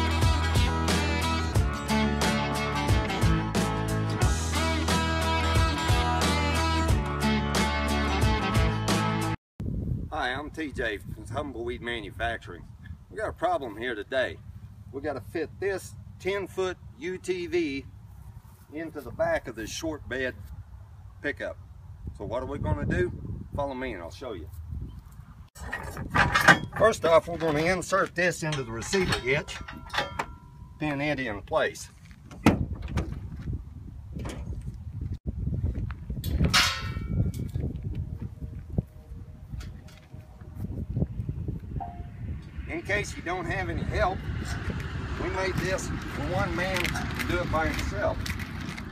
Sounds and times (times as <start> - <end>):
Speech: 10.1 - 17.9, 18.7 - 20.4, 21.2 - 21.6, 22.2 - 24.5, 26.8 - 29.6, 30.8 - 31.9, 42.7 - 44.2, 45.2 - 48.2.